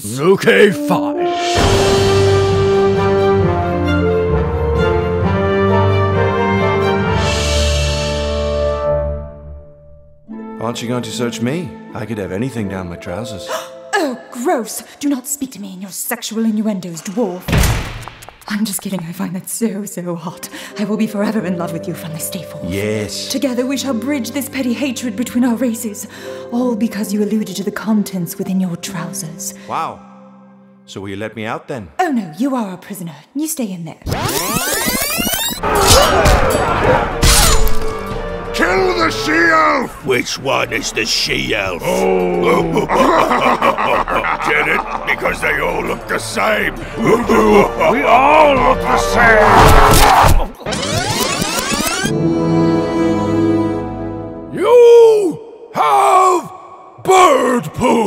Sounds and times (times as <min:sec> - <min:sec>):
Music: 0:00.0 - 0:55.5
Speech: 0:30.9 - 0:34.0, 0:38.6 - 0:42.9.